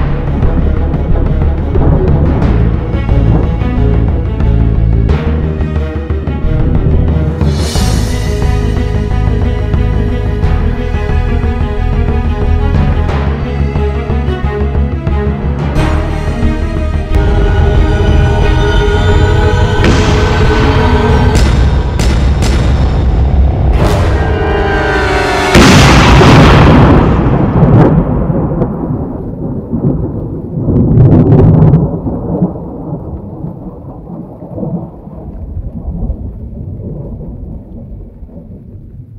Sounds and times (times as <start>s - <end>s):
Music: 0.0s - 28.6s.